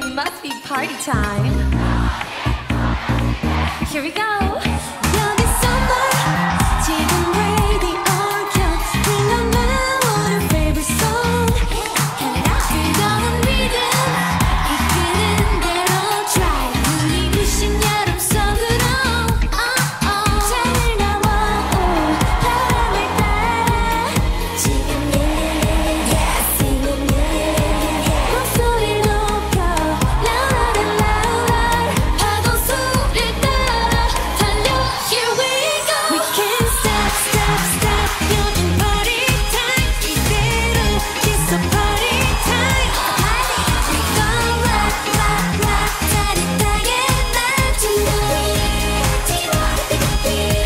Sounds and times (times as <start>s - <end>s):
Music: 0.0s - 50.6s.